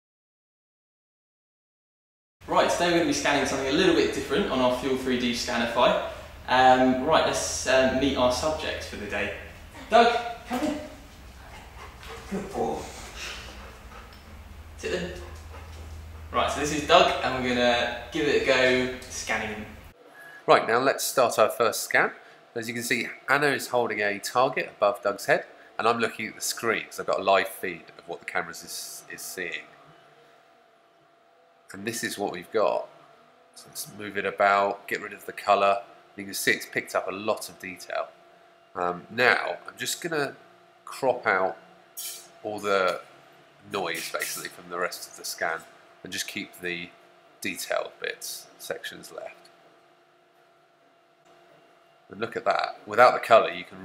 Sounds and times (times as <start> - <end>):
Speech: 2.5 - 11.0, 12.3 - 13.1, 14.8 - 15.3, 16.4 - 19.8, 20.5 - 29.8, 31.7 - 32.9, 33.6 - 38.1, 38.8 - 43.0, 43.7 - 49.4, 52.1 - 53.8.